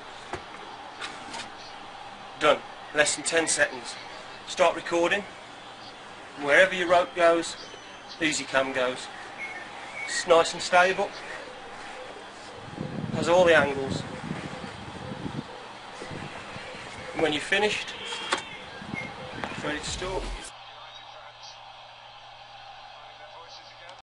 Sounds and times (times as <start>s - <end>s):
Speech: 2.4s - 5.3s, 6.4s - 7.6s, 8.2s - 9.1s, 10.1s - 11.2s, 13.2s - 14.0s, 19.6s - 21.6s, 22.8s - 24.0s.